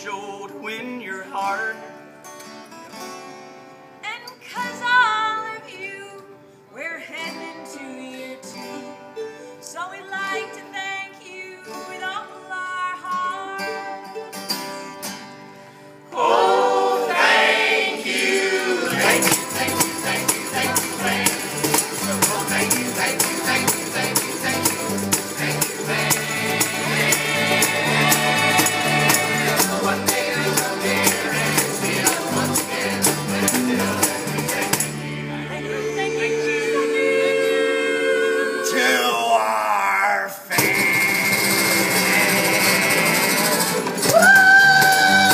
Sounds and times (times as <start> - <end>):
Music: 0.0 - 39.0, 40.4 - 45.3.